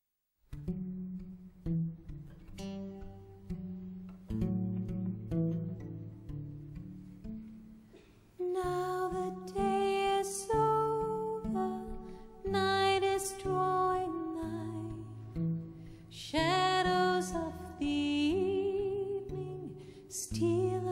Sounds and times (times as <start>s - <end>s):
Music: 0.4s - 20.9s.